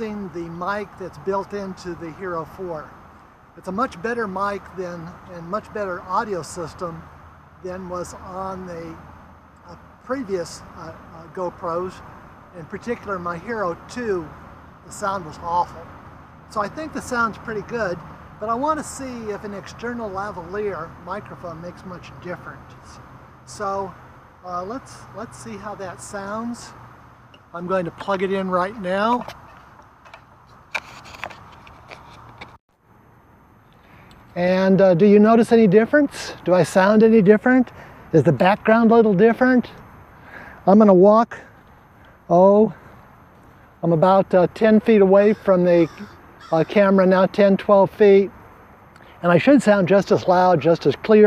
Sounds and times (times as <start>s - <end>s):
Speech: 0.0s - 2.9s, 3.6s - 7.0s, 7.6s - 9.0s, 9.6s - 15.9s, 16.5s - 26.8s, 27.5s - 29.3s, 34.4s - 39.8s, 40.6s - 41.5s, 42.3s - 42.8s, 43.8s - 48.3s, 49.2s - 51.2s.